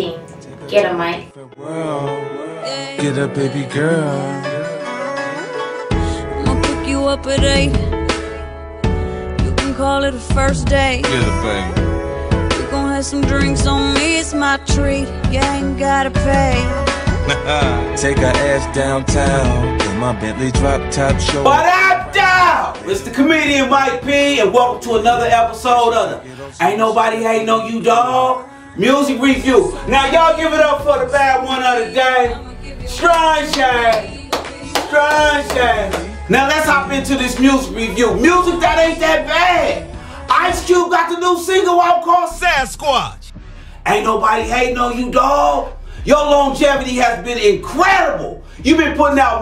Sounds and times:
Speech: 0:00.0 - 0:01.3, 0:21.5 - 0:34.1, 0:34.9 - 0:43.3, 0:43.9 - 0:49.4
Music: 0:00.0 - 0:49.4.

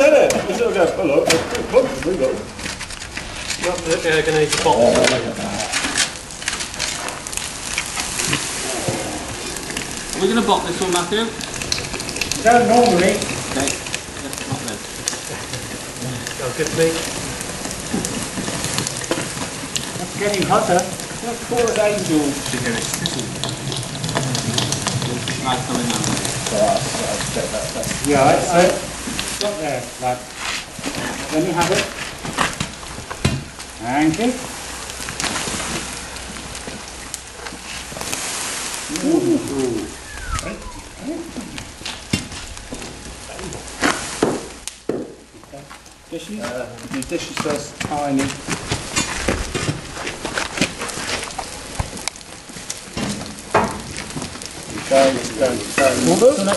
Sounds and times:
Gush: 0:00.0 - 0:56.5.

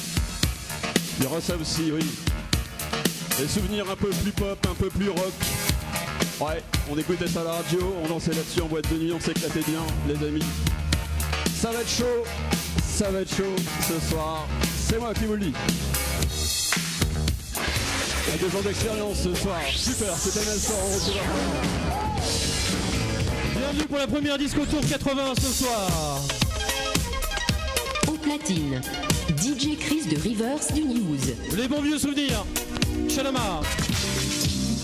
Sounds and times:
Music: 0:00.0 - 0:34.8
Speech: 0:01.2 - 0:02.3, 0:03.4 - 0:05.4, 0:06.4 - 0:10.6, 0:11.6 - 0:15.7, 0:18.2 - 0:21.3, 0:23.5 - 0:26.3, 0:28.0 - 0:32.5, 0:33.1 - 0:33.7.

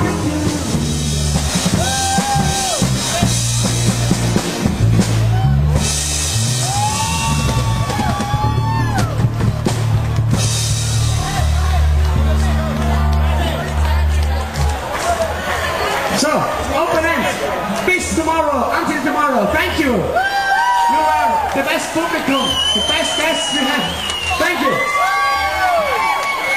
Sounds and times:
Music: 0:00.0 - 0:16.0
Inside, large room or hall: 0:00.0 - 0:26.5
Speech: 0:16.1 - 0:20.2, 0:20.9 - 0:24.9.

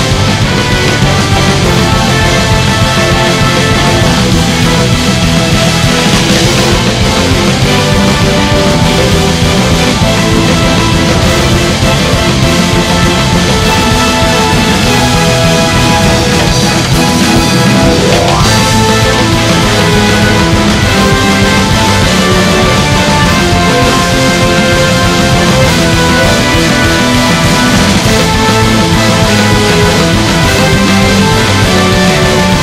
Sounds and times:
Exciting music: 0:00.0 - 0:32.6
Soundtrack music: 0:00.0 - 0:32.6
Theme music: 0:00.0 - 0:32.6.

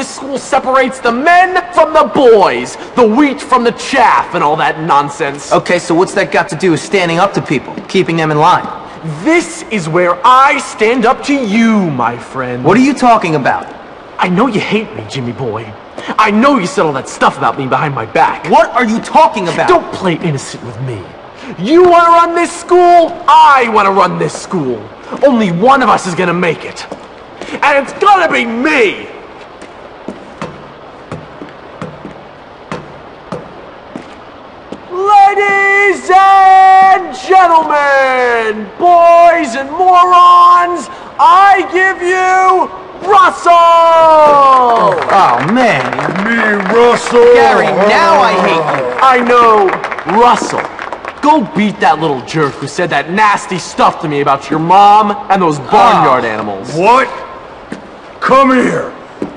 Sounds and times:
Speech: 0:00.0 - 0:27.0, 0:27.6 - 0:29.2, 0:34.9 - 0:57.3, 0:58.2 - 0:59.0.

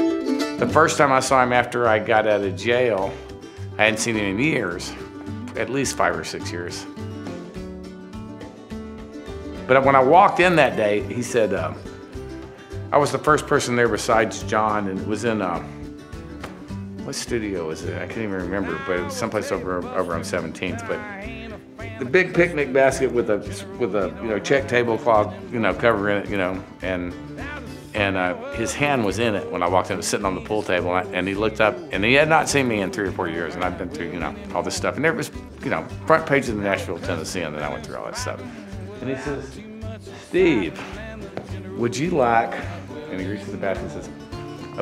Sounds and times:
Music: 0:00.0 - 0:44.8
Speech: 0:00.6 - 0:03.2, 0:03.8 - 0:05.0, 0:05.6 - 0:06.9, 0:09.7 - 0:11.8, 0:12.9 - 0:15.7, 0:17.1 - 0:21.3, 0:22.0 - 0:27.2, 0:28.0 - 0:39.6, 0:40.3 - 0:40.8, 0:41.8 - 0:44.2.

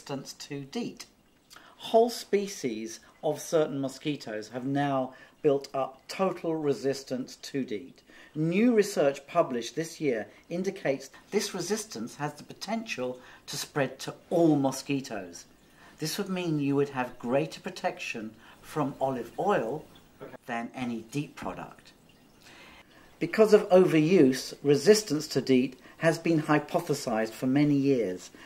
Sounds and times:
Speech: 0:00.0 - 0:01.1, 0:01.8 - 0:22.0, 0:23.2 - 0:28.4.

